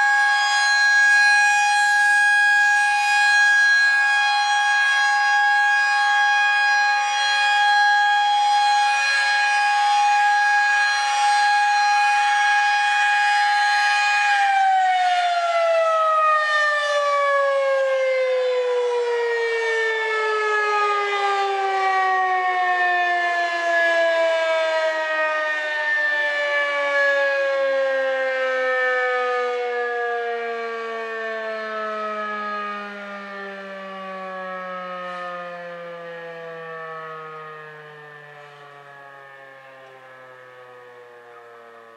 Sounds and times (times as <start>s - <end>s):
Siren: 0.0s - 41.9s.